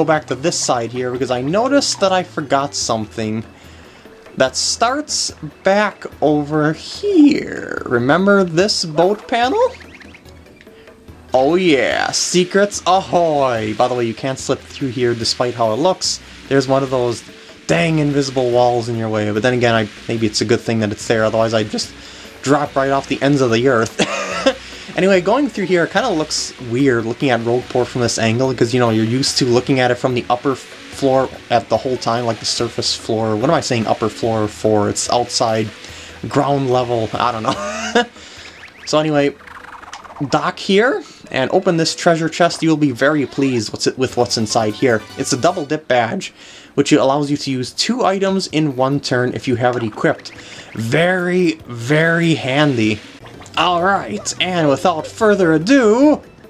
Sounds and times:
Speech: 0.0 - 3.5, 4.4 - 9.8, 11.3 - 38.1, 38.9 - 39.4, 40.1 - 56.3.

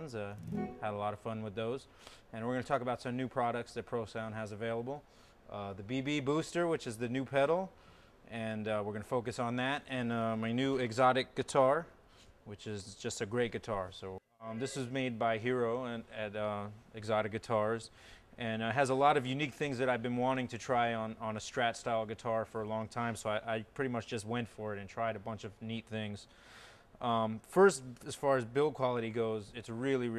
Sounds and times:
Speech: 0.0 - 26.3, 27.0 - 30.1.

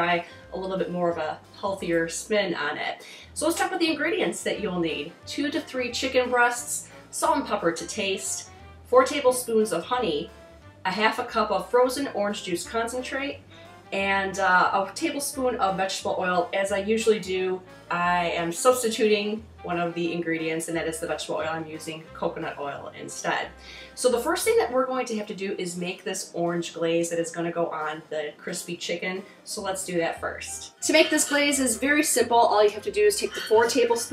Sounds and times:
Speech: 0.0 - 10.3, 10.9 - 13.4, 14.0 - 34.1
Music: 0.0 - 34.1.

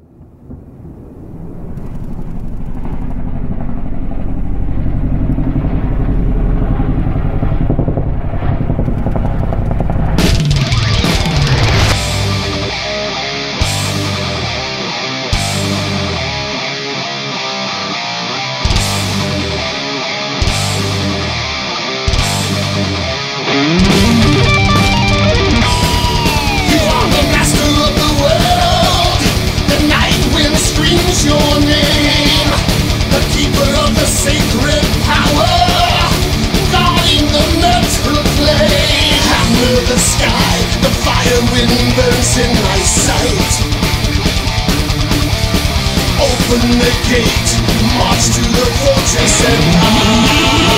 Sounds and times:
Sampler: 23.6 - 50.7.

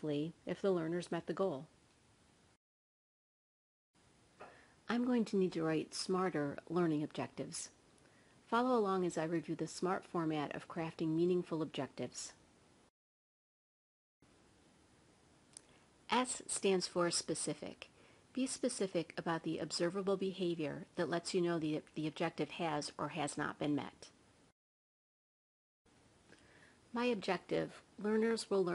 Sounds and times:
Speech: 0.0 - 1.7, 4.9 - 7.8, 8.5 - 12.4, 16.1 - 24.2, 26.9 - 28.7.

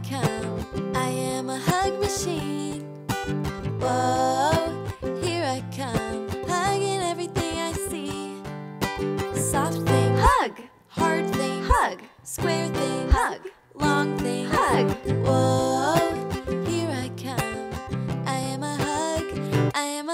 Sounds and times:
Music: 0.0 - 20.1.

